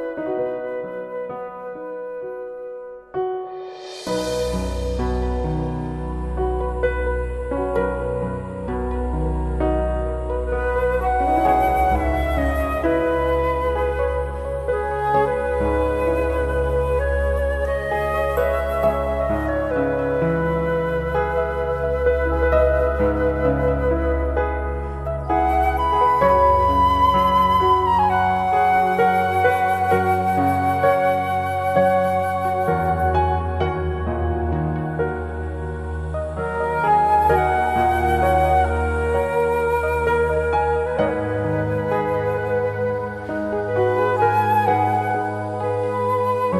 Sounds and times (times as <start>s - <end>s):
Sad music: 0.0s - 46.5s.